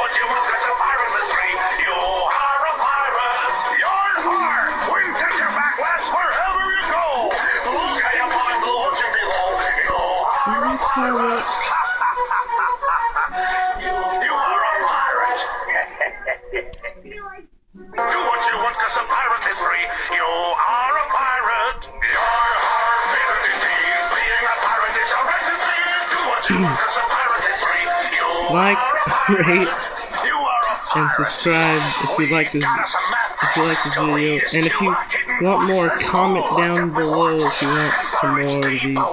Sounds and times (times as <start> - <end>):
Music: 0.0 - 39.1
Speech: 10.5 - 11.5, 26.5 - 26.8, 28.4 - 29.7, 30.9 - 39.1.